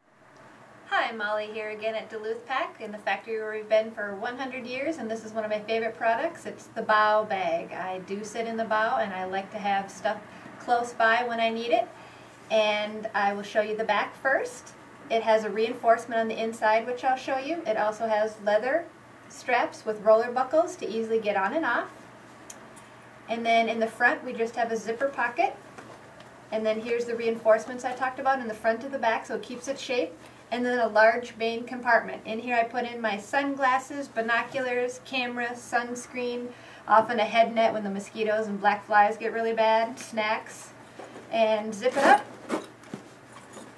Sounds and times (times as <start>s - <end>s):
Speech: 0.9s - 11.9s, 12.5s - 22.0s, 23.3s - 25.6s, 26.5s - 42.3s.